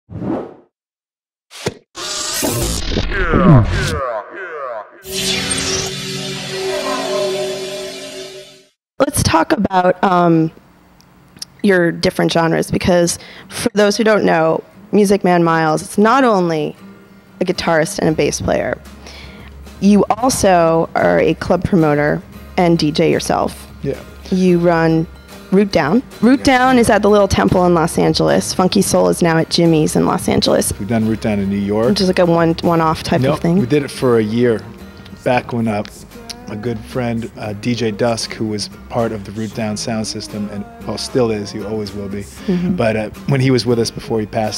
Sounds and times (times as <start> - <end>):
Speech: 3.1 - 4.9, 9.0 - 10.6, 19.8 - 44.5.